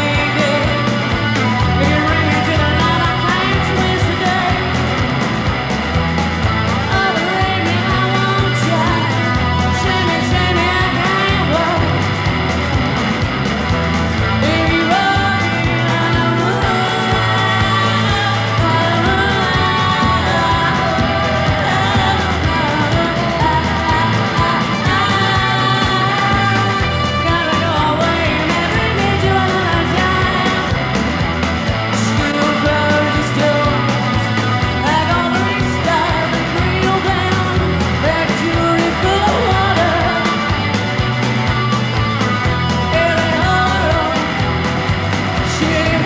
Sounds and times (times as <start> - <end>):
Music: 0.0 - 46.0.